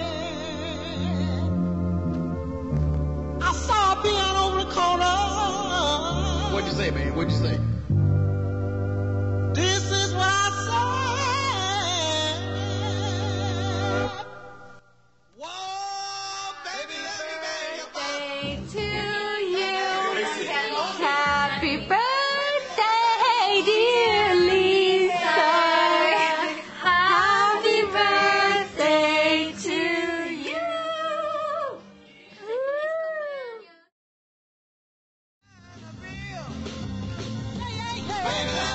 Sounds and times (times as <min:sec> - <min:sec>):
Music: 0:00.0 - 0:15.1, 0:16.0 - 0:33.9, 0:35.4 - 0:38.7.